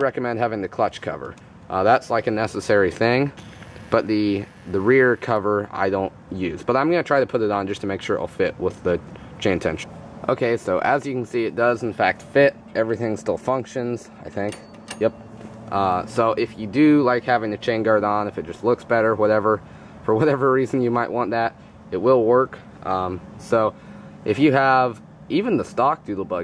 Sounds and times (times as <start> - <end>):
Speech: 0.0 - 26.4.